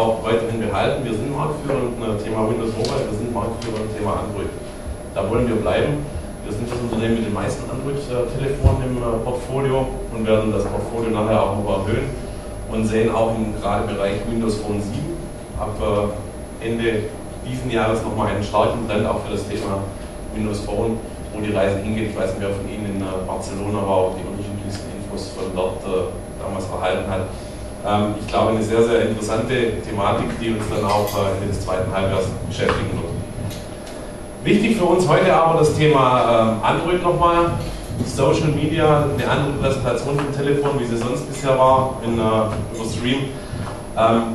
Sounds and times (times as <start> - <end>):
Speech: 0.0 - 4.6, 5.2 - 33.3, 34.4 - 43.4, 44.0 - 44.3.